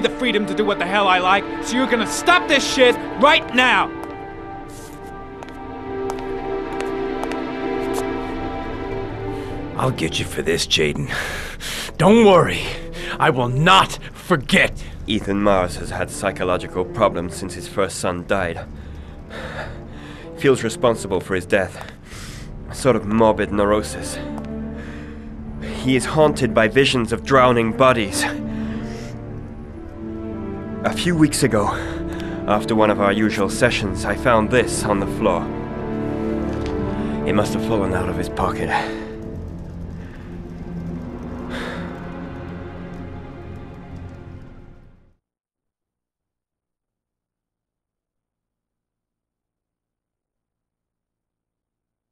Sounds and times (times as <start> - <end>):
Speech: 0.0 - 3.9, 9.8 - 11.2, 12.0 - 18.7, 20.4 - 21.8, 22.7 - 24.2, 25.8 - 28.4, 30.9 - 31.8, 32.5 - 35.5, 37.3 - 39.0
Music: 0.0 - 45.2.